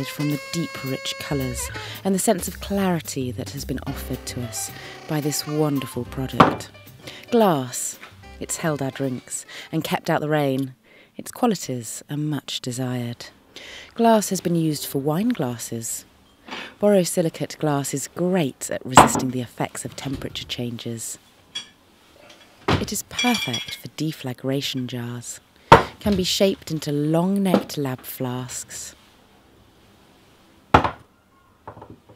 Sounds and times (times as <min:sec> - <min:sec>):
Speech: 0:00.0 - 0:06.7, 0:07.3 - 0:13.4, 0:14.0 - 0:16.1, 0:16.8 - 0:21.2, 0:22.8 - 0:25.4, 0:26.0 - 0:29.0
Glass: 0:23.2 - 0:23.9.